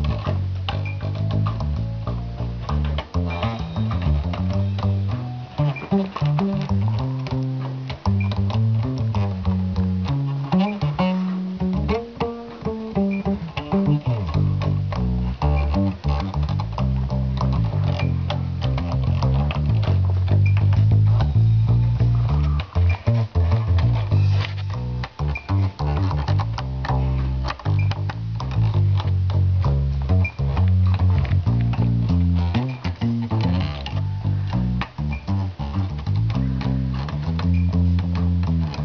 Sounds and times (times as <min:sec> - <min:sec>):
Music: 0:00.0 - 0:38.8.